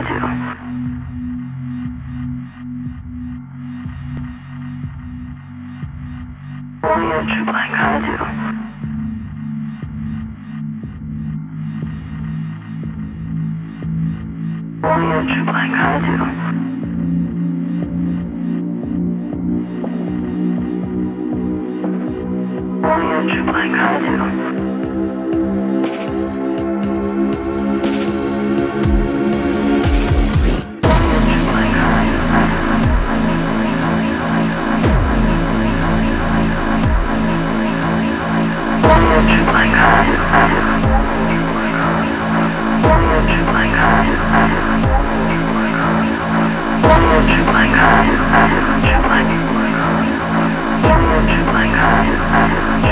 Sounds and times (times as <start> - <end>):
Techno: 0.0 - 52.9.